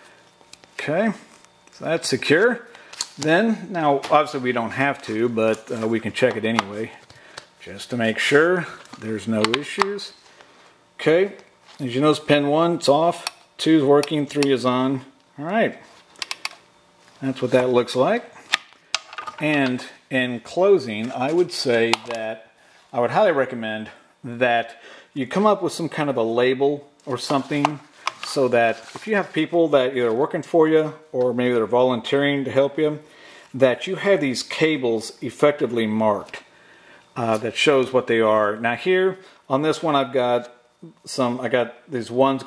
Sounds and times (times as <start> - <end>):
Speech: 0.8 - 7.0, 7.6 - 10.2, 11.0 - 15.9, 17.2 - 18.3, 19.4 - 36.5, 37.2 - 42.4.